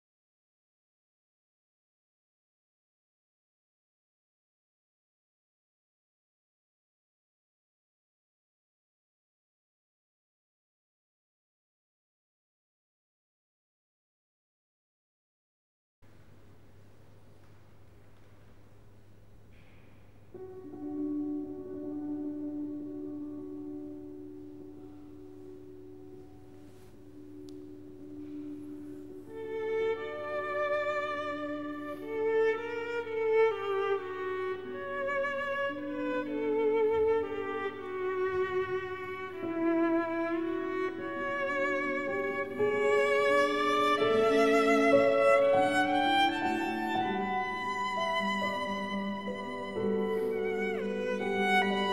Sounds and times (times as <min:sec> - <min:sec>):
Violin, fiddle: 0:26.6 - 0:51.9.